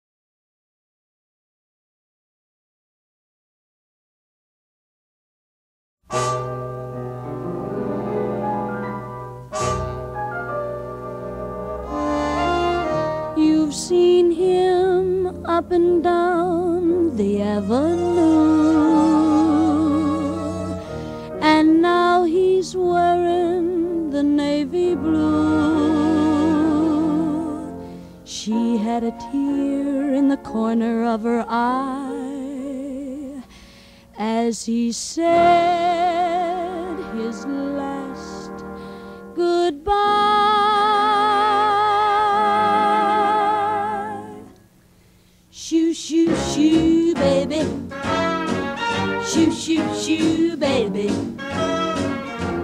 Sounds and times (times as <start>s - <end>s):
Music: 6.0s - 52.6s.